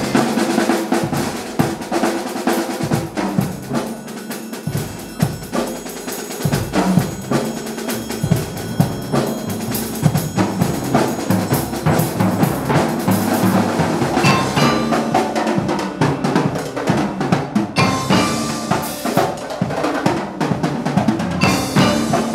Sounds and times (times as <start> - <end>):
Marimba, xylophone: 2.8 - 22.3
Glockenspiel: 2.9 - 19.8, 21.2 - 22.3.